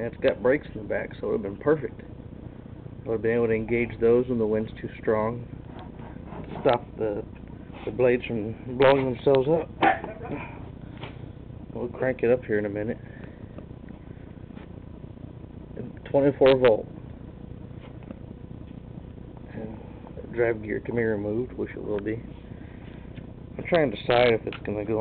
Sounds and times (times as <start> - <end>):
Speech: 0.0 - 2.0, 3.0 - 5.5, 6.5 - 10.6, 11.7 - 13.0, 15.8 - 16.9, 19.5 - 22.3, 23.6 - 25.0.